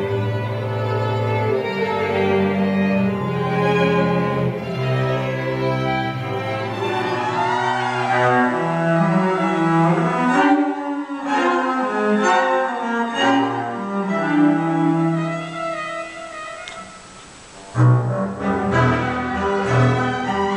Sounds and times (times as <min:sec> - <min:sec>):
Violin, fiddle: 0:00.0 - 0:17.0, 0:17.8 - 0:20.5
Cello: 0:00.0 - 0:20.5
Double bass: 0:17.6 - 0:20.5.